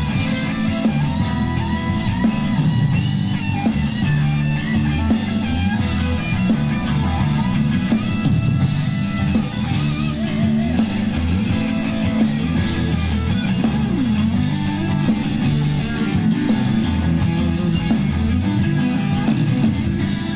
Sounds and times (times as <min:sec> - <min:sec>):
Guitar: 0:00.0 - 0:20.3
Inside, public space: 0:00.0 - 0:20.3.